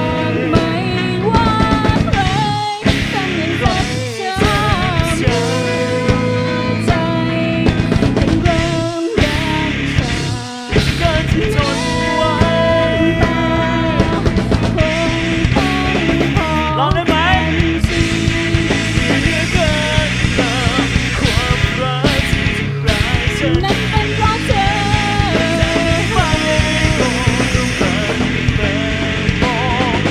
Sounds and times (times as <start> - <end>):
Music: 0.0 - 30.1.